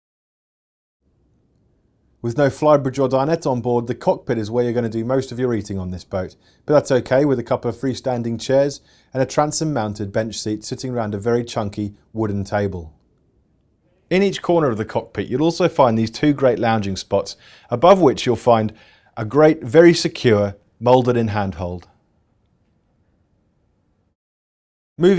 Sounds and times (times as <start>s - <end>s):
Speech: 2.2s - 13.0s, 13.9s - 22.0s.